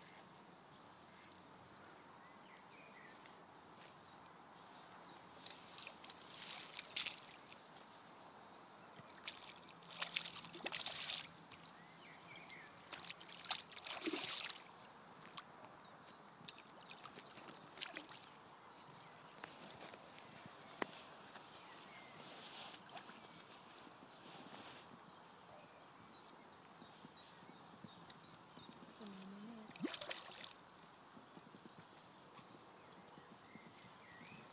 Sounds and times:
Outside, rural or natural: 0:00.0 - 0:34.5.

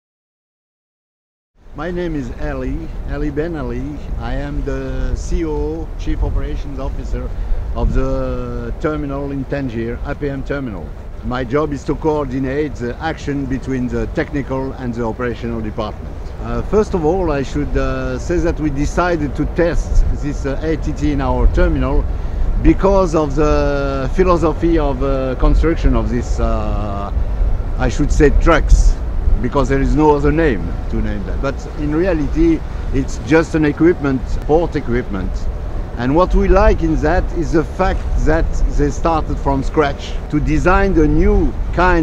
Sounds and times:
Speech: 0:01.8 - 0:27.2, 0:27.8 - 0:35.4, 0:36.0 - 0:42.0.

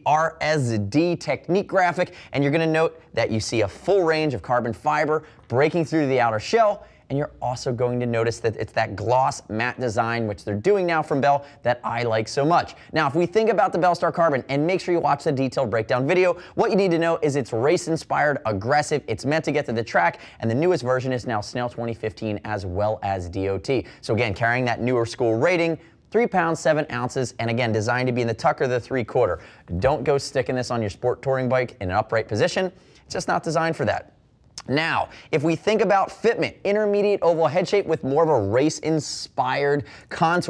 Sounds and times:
Speech: 0:00.0 - 0:40.4.

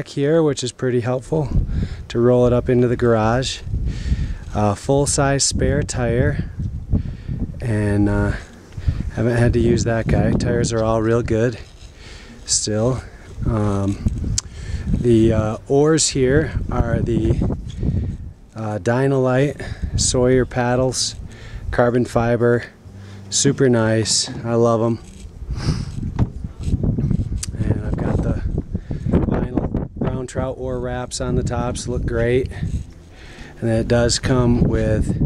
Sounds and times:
Speech: 0:00.0 - 0:03.6, 0:04.5 - 0:06.5, 0:07.6 - 0:08.5, 0:09.1 - 0:11.6, 0:12.5 - 0:14.1, 0:15.0 - 0:17.4, 0:18.6 - 0:25.1, 0:27.5 - 0:28.5, 0:29.3 - 0:32.7, 0:33.6 - 0:35.2.

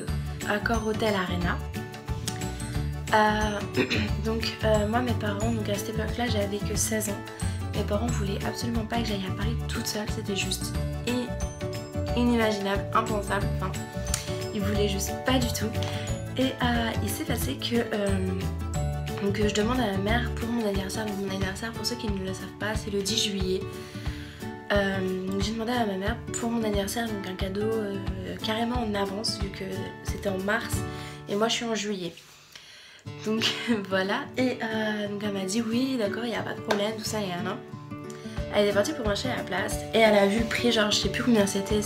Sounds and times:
Speech: 0:00.0 - 0:01.7, 0:03.1 - 0:11.4, 0:12.2 - 0:13.8, 0:14.5 - 0:15.8, 0:16.4 - 0:18.5, 0:19.2 - 0:23.7, 0:24.7 - 0:32.2, 0:33.2 - 0:37.6, 0:38.5 - 0:41.8
Music: 0:00.0 - 0:41.8.

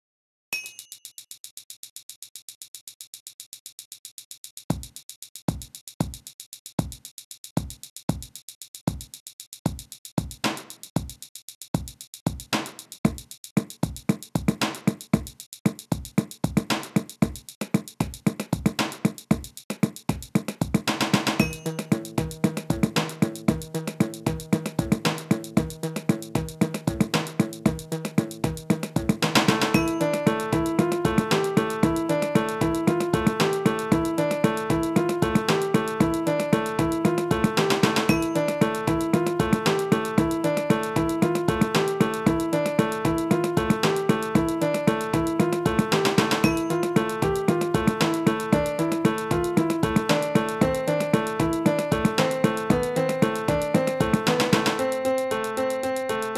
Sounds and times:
Music: 0:04.5 - 0:56.3.

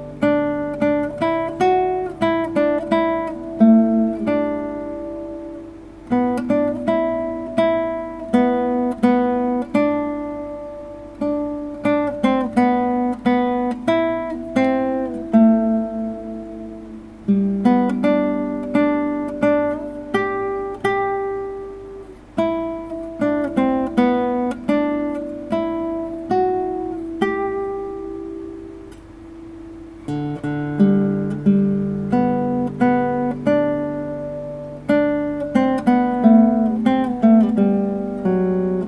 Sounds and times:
Acoustic guitar: 0:00.0 - 0:38.8
Strum: 0:00.0 - 0:38.8.

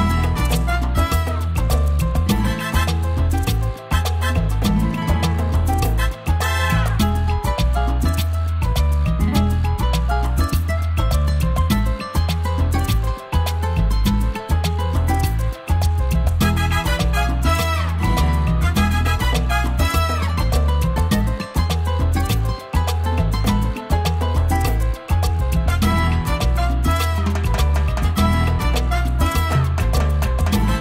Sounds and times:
Music: 0:00.0 - 0:30.8.

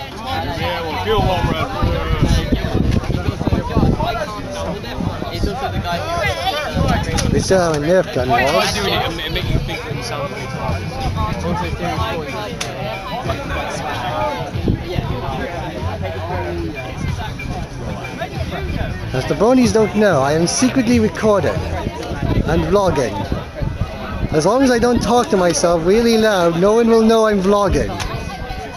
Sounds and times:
Speech: 0:00.0 - 0:23.5, 0:24.1 - 0:28.7
Music: 0:00.0 - 0:28.7.

